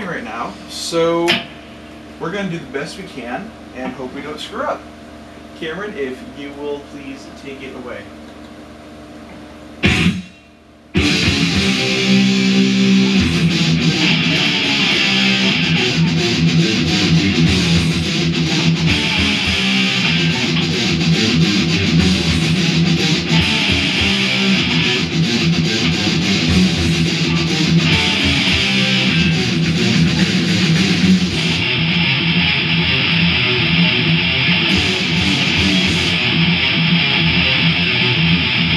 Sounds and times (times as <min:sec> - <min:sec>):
Strum: 0:09.8 - 0:38.7.